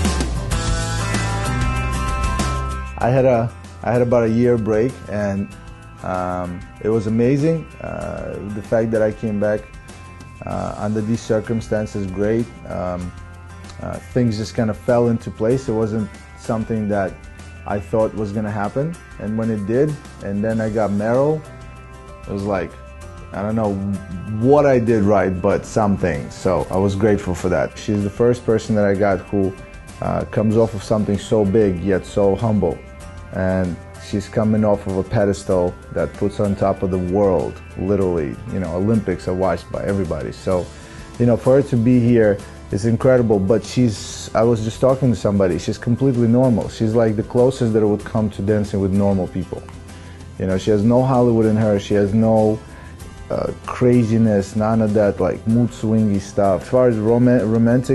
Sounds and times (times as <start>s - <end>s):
Music: 0.0s - 57.9s
Speech: 3.0s - 9.7s, 10.4s - 13.1s, 13.7s - 21.5s, 22.2s - 49.7s, 50.4s - 52.6s, 53.3s - 57.9s.